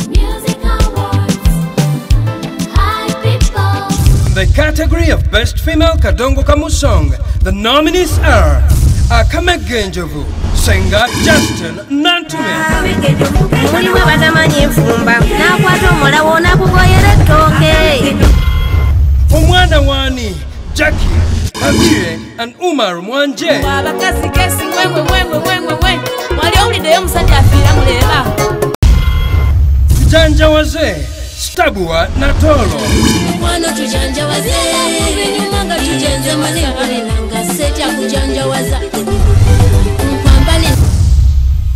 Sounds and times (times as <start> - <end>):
Dance music: 0.0 - 4.6, 11.2 - 18.6, 23.6 - 28.8, 32.6 - 40.9.